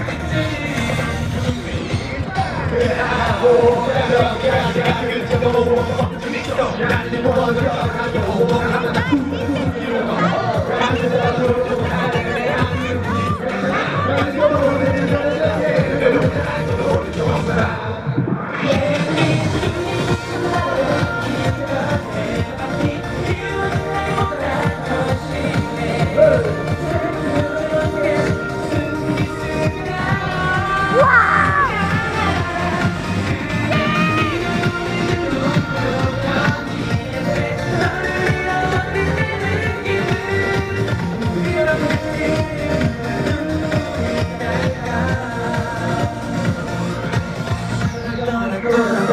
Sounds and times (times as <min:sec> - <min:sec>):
Music: 0:00.0 - 0:49.1.